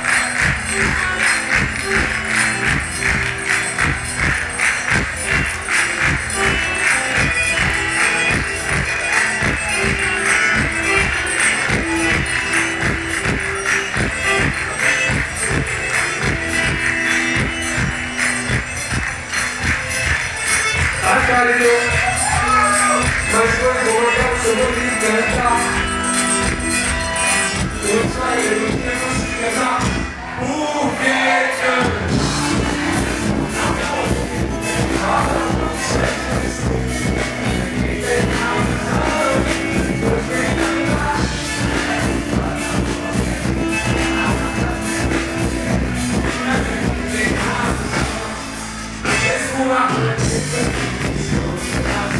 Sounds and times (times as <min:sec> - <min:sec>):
Inside, large room or hall: 0:00.0 - 0:52.1
Music: 0:00.0 - 0:52.1.